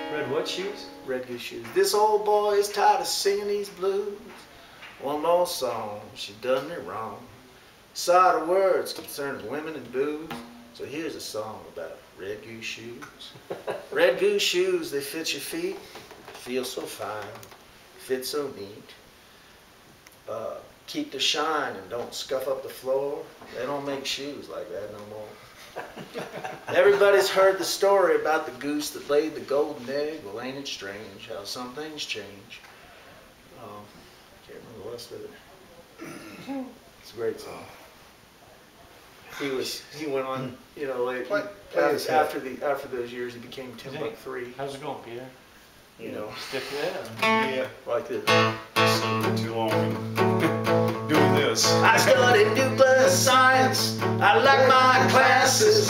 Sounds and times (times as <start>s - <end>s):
Speech: 0.1s - 7.4s, 8.0s - 15.8s, 16.4s - 19.0s, 20.3s - 25.4s, 26.7s - 32.6s, 33.5s - 37.9s, 39.3s - 45.4s, 46.0s - 48.3s, 48.9s - 50.0s, 51.1s - 52.4s.